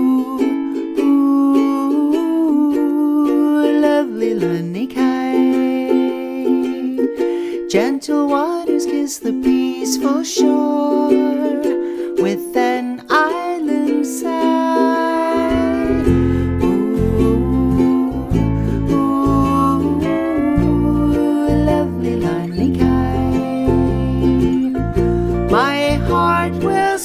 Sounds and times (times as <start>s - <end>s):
Ukulele: 0.0s - 27.0s.